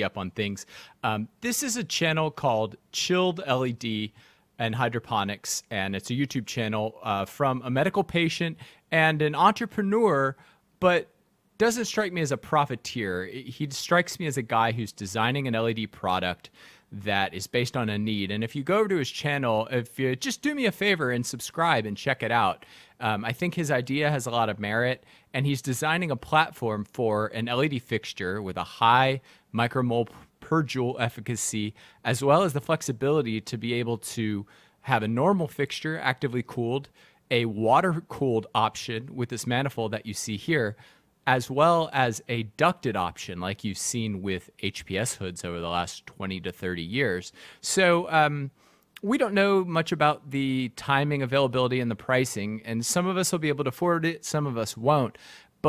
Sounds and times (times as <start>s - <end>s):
Speech: 0.0s - 55.6s.